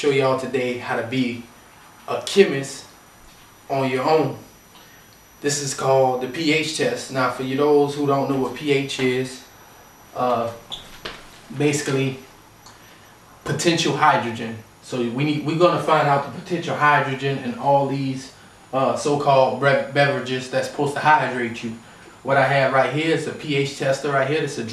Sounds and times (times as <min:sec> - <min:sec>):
Speech: 0:00.0 - 0:01.5, 0:02.1 - 0:03.0, 0:03.7 - 0:04.5, 0:05.4 - 0:09.5, 0:10.2 - 0:10.7, 0:11.5 - 0:12.3, 0:13.4 - 0:24.7.